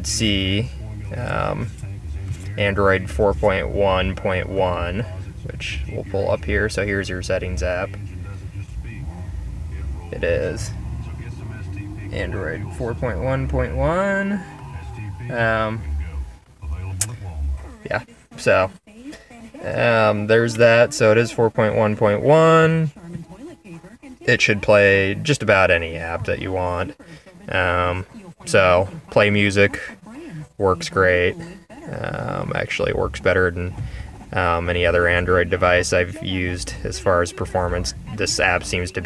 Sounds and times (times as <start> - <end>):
Speech: 0.0 - 39.0.